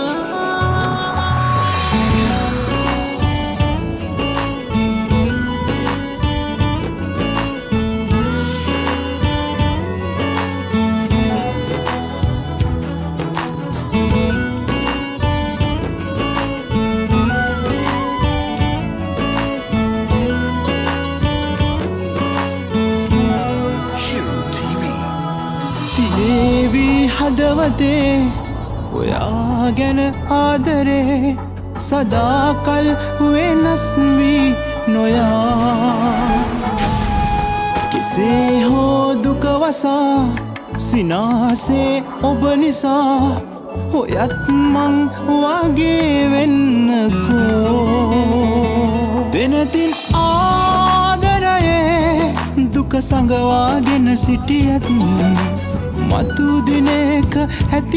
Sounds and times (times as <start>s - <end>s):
Music of Bollywood: 0.0s - 57.9s.